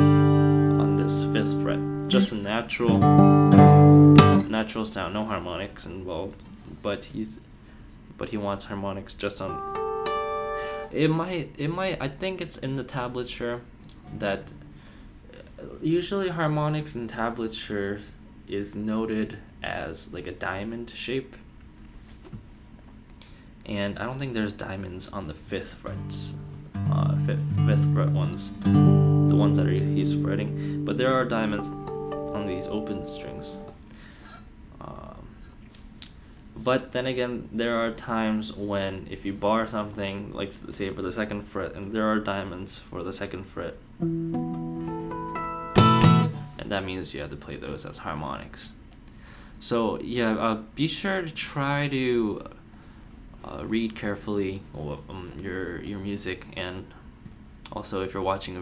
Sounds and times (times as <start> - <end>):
Acoustic guitar: 0.0 - 4.5, 9.5 - 10.9, 25.9 - 33.8, 44.0 - 46.6
Speech: 0.8 - 3.0, 4.4 - 7.5, 8.2 - 9.6, 10.9 - 14.6, 15.3 - 21.5, 23.6 - 28.6, 29.3 - 33.7, 34.8 - 35.4, 36.6 - 43.8, 46.6 - 48.8, 49.6 - 52.6, 53.4 - 57.1, 57.7 - 58.6.